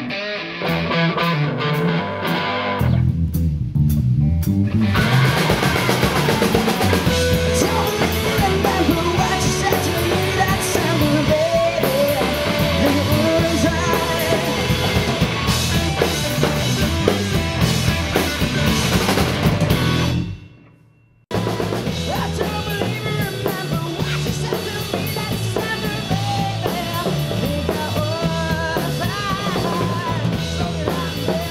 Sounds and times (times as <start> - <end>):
Music: 0.0 - 31.5.